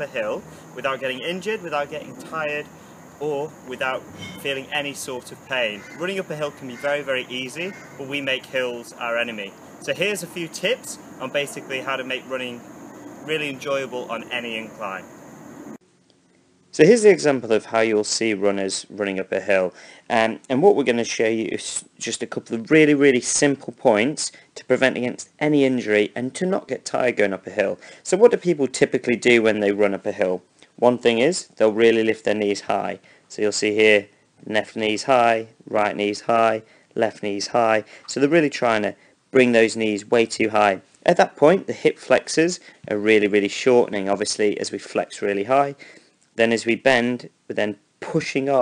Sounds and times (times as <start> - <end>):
Speech: 0.0 - 12.6, 13.3 - 15.0, 16.8 - 45.8, 46.4 - 48.6.